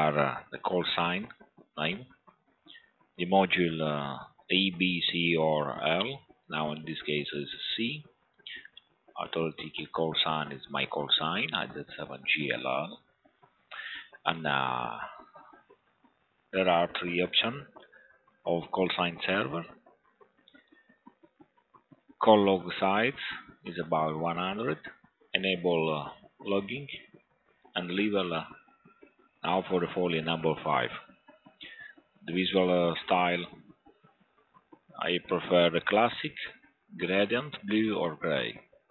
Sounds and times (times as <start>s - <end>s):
Speech: 0.0s - 2.1s, 3.2s - 13.0s, 13.8s - 15.2s, 16.6s - 17.7s, 18.5s - 19.7s, 22.2s - 27.1s, 27.8s - 28.6s, 29.4s - 33.6s, 35.0s - 38.6s.